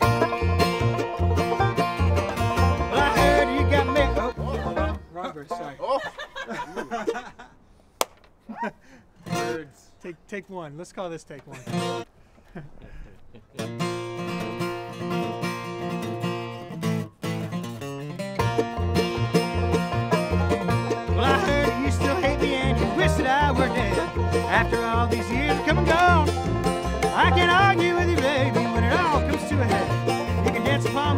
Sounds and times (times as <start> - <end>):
Music: 0.0 - 5.0, 13.7 - 31.1.